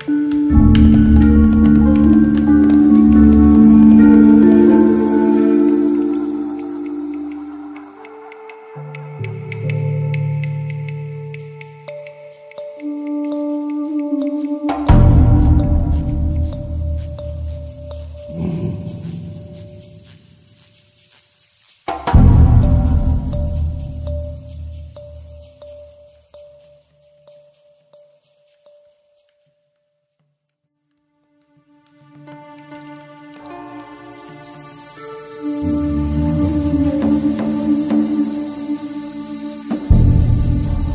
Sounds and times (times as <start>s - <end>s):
Music: 0.0s - 40.9s.